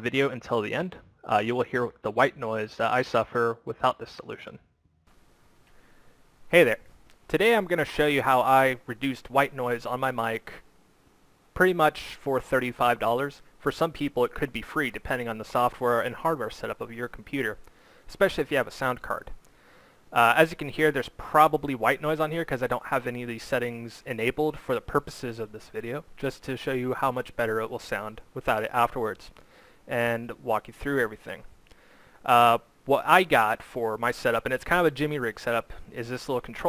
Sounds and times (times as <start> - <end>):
Speech: 0.0 - 4.6, 6.5 - 10.7, 11.6 - 19.4, 20.2 - 31.5, 32.2 - 36.6.